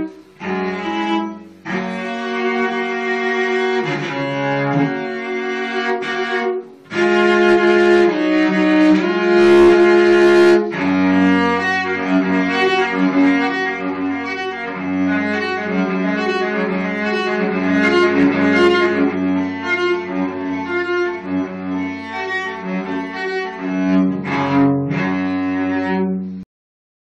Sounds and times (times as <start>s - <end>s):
Cello: 0.0s - 26.5s.